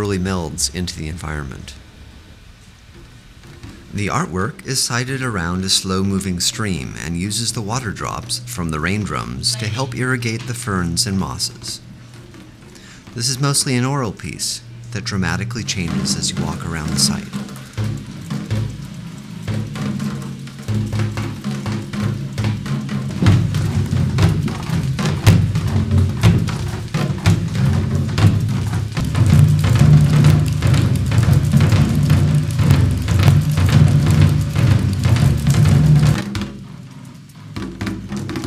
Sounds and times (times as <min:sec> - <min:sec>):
Speech: 0:00.0 - 0:01.8, 0:03.9 - 0:11.8, 0:13.2 - 0:17.4
Bass drum: 0:03.4 - 0:38.4.